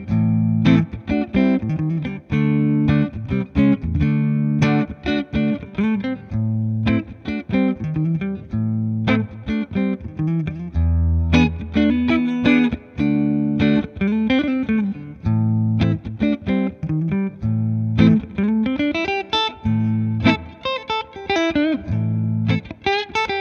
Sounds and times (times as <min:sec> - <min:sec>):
Guitar: 0:00.0 - 0:23.4.